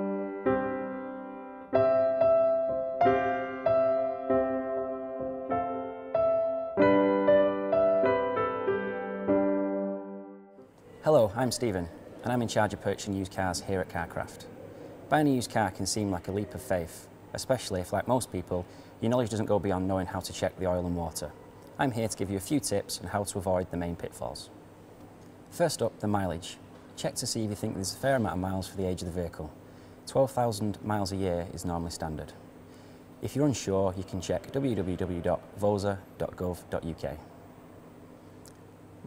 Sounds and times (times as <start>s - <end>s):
Speech: 11.0s - 14.5s, 15.1s - 24.5s, 25.5s - 32.4s, 33.2s - 37.3s.